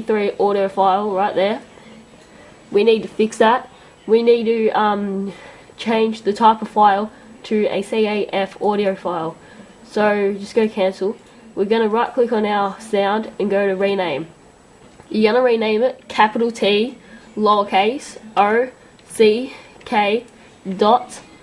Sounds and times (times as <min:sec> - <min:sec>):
Speech: 0:00.0 - 0:14.4, 0:15.1 - 0:21.4.